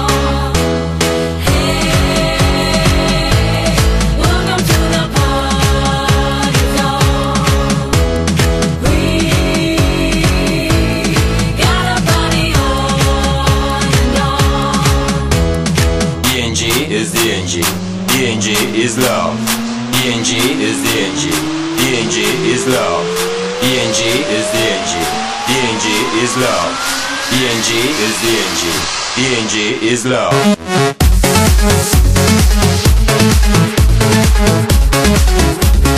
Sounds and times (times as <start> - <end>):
Electronic dance music: 0.0 - 35.9
House music: 0.0 - 35.9.